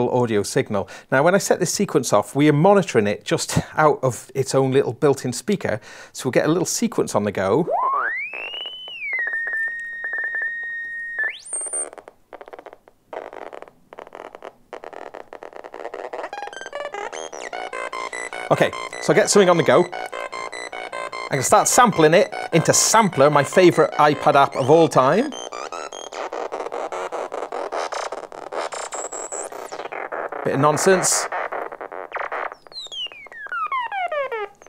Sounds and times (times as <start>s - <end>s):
Speech: 0.0s - 7.7s, 18.5s - 19.9s, 21.3s - 25.4s, 30.4s - 31.3s
Inside, small room: 0.0s - 34.6s
Synthesizer: 7.6s - 11.8s, 16.2s - 34.6s.